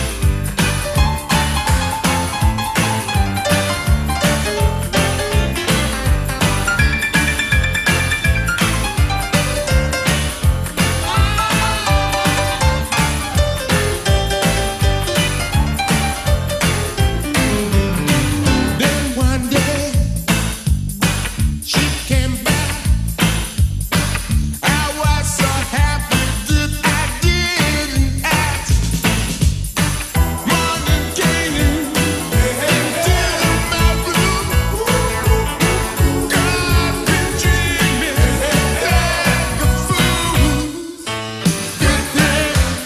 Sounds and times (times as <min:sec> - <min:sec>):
Soul music: 0:00.0 - 0:42.8
Singing: 0:30.5 - 0:41.1, 0:41.8 - 0:42.8.